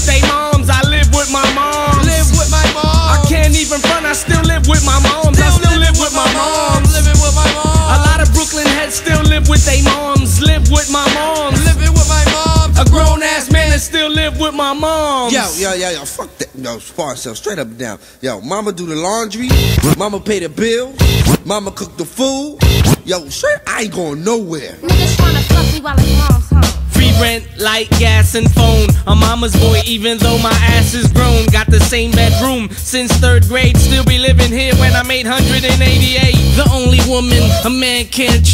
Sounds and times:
Music: 0:00.0 - 0:15.6, 0:19.4 - 0:20.3, 0:20.9 - 0:21.9, 0:22.5 - 0:23.2, 0:24.8 - 0:38.5.

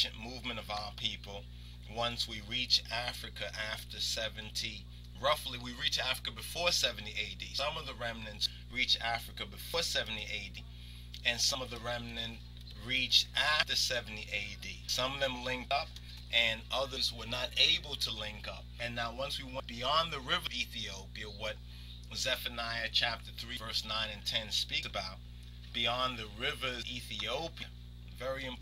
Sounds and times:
Speech: 0:00.0 - 0:28.6.

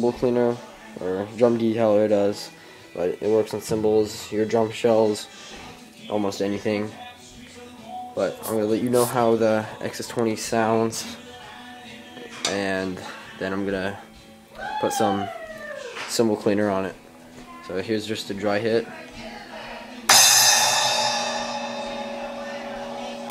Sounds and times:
Speech: 0:06.1 - 0:07.0, 0:08.2 - 0:11.2, 0:12.5 - 0:14.0, 0:14.7 - 0:15.4, 0:16.1 - 0:20.1.

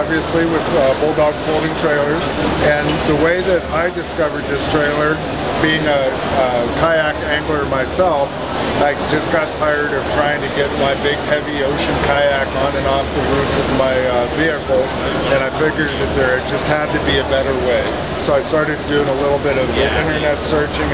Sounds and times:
Speech: 0:00.0 - 0:20.9.

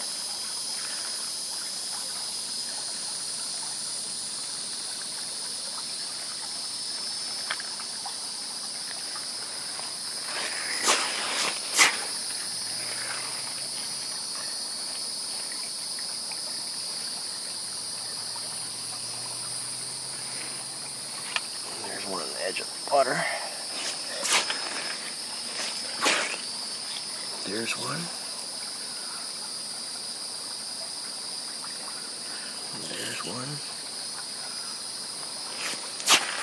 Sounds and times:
Insect: 0:00.0 - 0:36.4
Outside, rural or natural: 0:00.0 - 0:36.4.

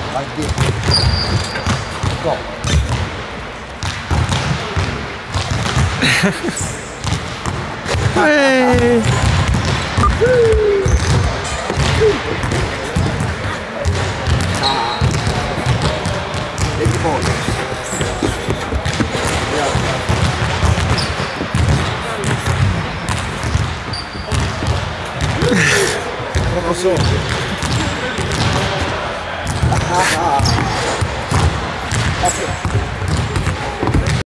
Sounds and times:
Basketball bounce: 0:00.5 - 0:03.1, 0:03.8 - 0:06.0, 0:07.0 - 0:25.6, 0:26.3 - 0:34.2
Speech: 0:14.6 - 0:20.2, 0:27.8 - 0:30.9.

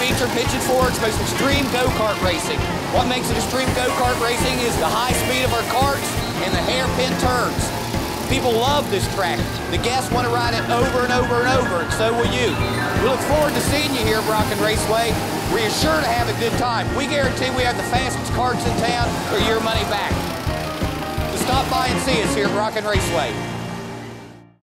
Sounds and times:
Speech: 0:00.0 - 0:07.7, 0:08.3 - 0:20.2, 0:21.3 - 0:23.4
Music: 0:00.0 - 0:24.6.

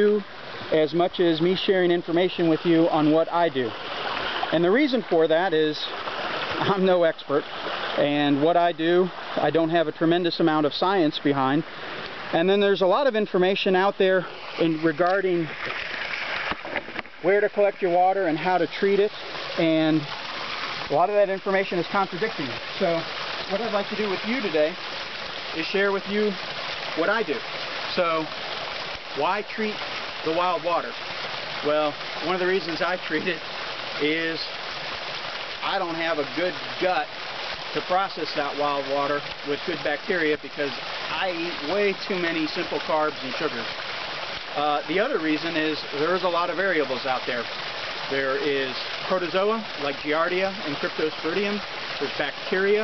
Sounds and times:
Speech: 0:00.0 - 0:03.7, 0:04.5 - 0:05.9, 0:06.6 - 0:07.4, 0:08.0 - 0:11.6, 0:12.4 - 0:15.5, 0:17.2 - 0:20.1, 0:20.9 - 0:24.8, 0:25.6 - 0:26.4, 0:27.0 - 0:28.3, 0:29.2 - 0:31.0, 0:31.6 - 0:33.4, 0:34.0 - 0:34.5, 0:35.6 - 0:37.1, 0:37.8 - 0:43.7, 0:44.6 - 0:47.5, 0:48.1 - 0:52.8.

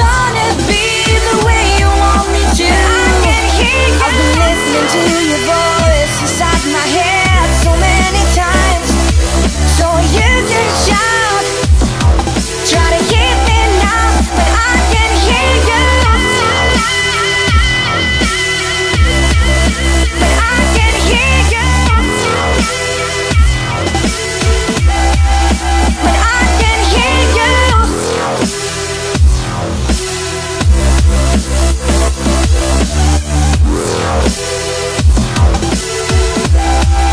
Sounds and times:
Drum and bass: 0:00.0 - 0:37.1.

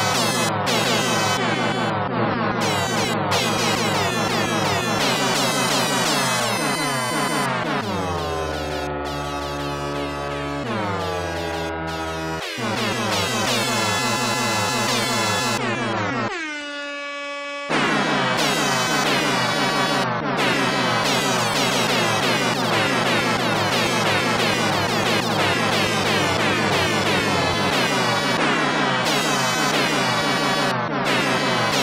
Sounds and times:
Music: 0:00.0 - 0:16.3, 0:17.7 - 0:31.8
Air horn, truck horn: 0:00.0 - 0:31.8.

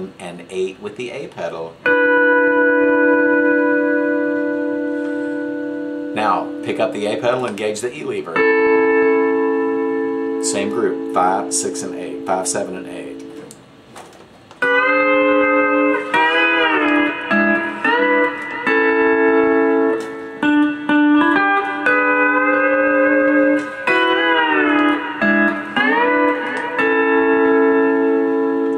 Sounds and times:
Inside, small room: 0:00.0 - 0:28.7
Tapping (guitar technique): 0:01.2 - 0:28.7
Steel guitar, slide guitar: 0:01.8 - 0:13.6, 0:14.6 - 0:28.7.

